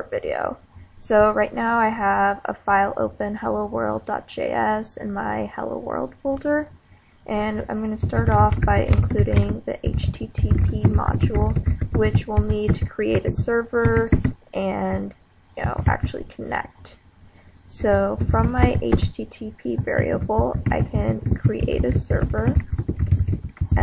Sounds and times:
Speech: 0:00.0 - 0:06.7, 0:07.3 - 0:17.0, 0:17.7 - 0:22.6
Inside, small room: 0:00.0 - 0:23.8.

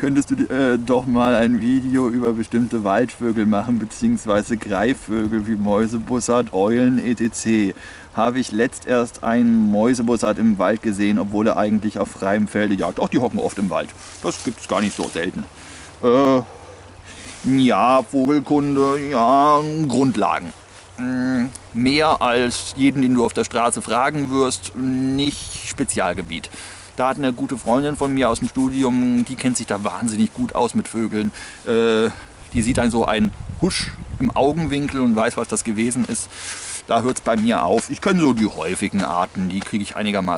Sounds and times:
Speech: 0:00.0 - 0:16.5, 0:17.4 - 0:36.3, 0:36.9 - 0:40.3
Outside, rural or natural: 0:00.0 - 0:40.3.

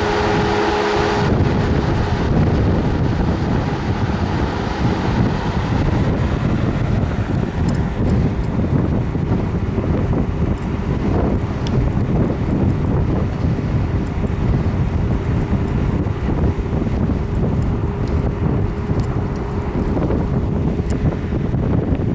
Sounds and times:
Rain: 0:00.0 - 0:22.0.

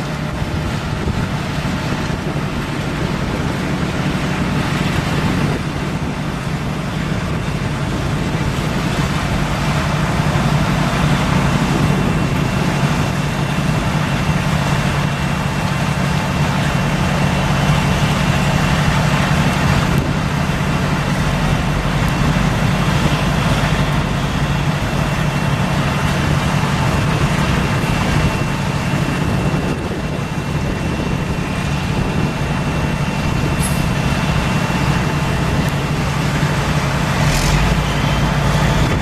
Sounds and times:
Truck: 0:00.0 - 0:39.0.

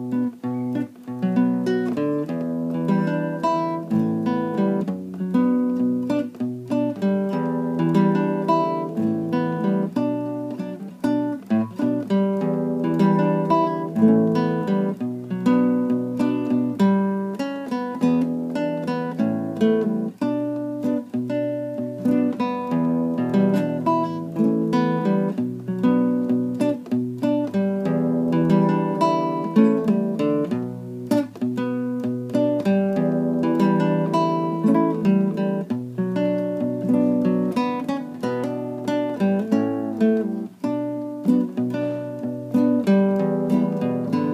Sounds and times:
Acoustic guitar: 0:00.0 - 0:44.3
Strum: 0:00.0 - 0:44.3.

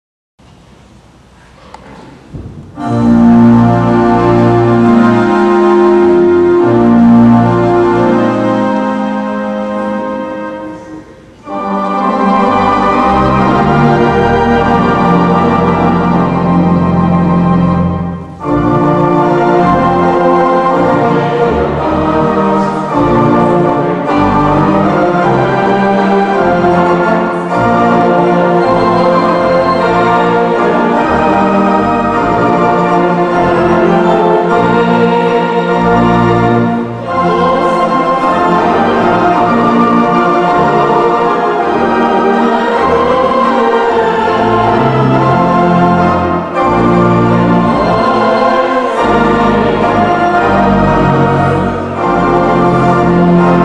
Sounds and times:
Music: 0:02.4 - 0:53.6.

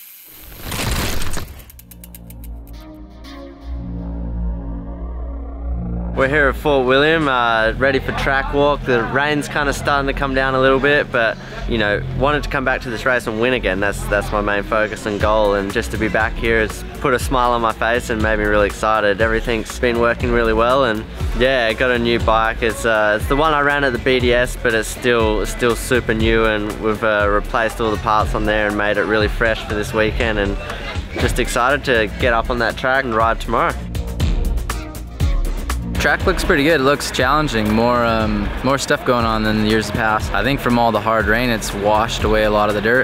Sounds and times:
Music: 0:01.7 - 0:43.0
Speech: 0:06.2 - 0:33.8, 0:36.0 - 0:43.0.

